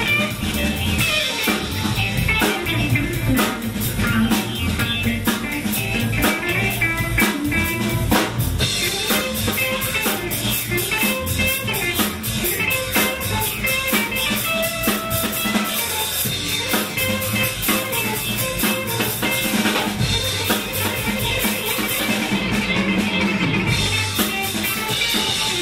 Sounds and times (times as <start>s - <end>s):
Electric guitar: 0.0s - 25.6s.